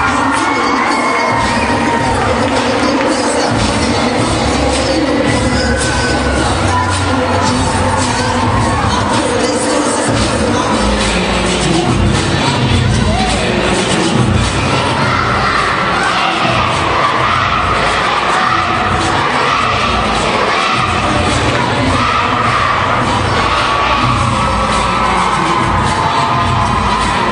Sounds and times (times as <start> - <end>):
Cheering: 0.0 - 27.3
Music: 0.0 - 27.3.